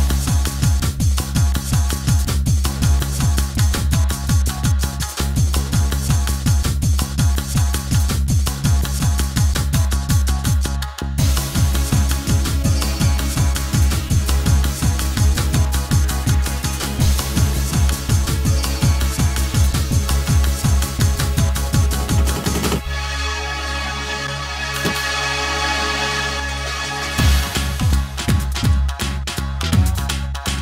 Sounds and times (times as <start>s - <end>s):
Rhythm and blues: 0.0s - 30.6s.